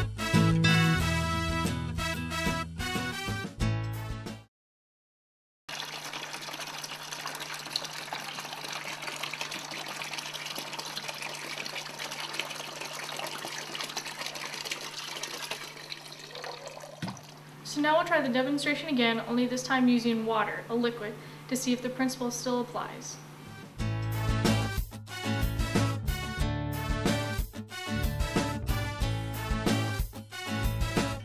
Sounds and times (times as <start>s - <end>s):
Speech: 17.7s - 23.2s.